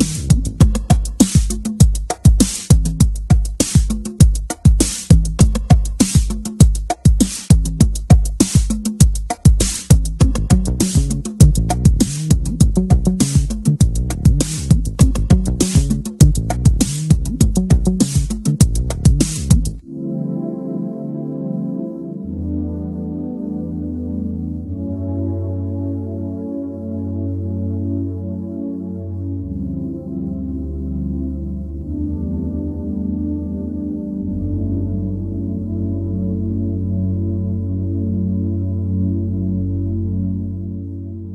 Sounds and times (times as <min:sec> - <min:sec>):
Ambient music: 0:09.9 - 0:41.3.